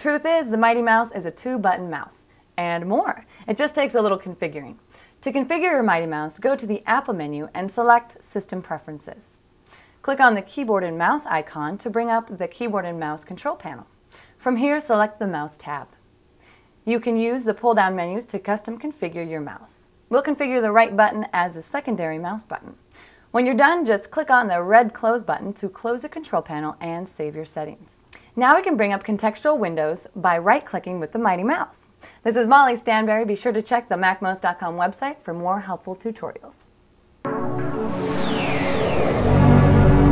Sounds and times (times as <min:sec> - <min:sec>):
Speech: 0:00.0 - 0:09.4, 0:10.0 - 0:16.0, 0:16.9 - 0:36.7.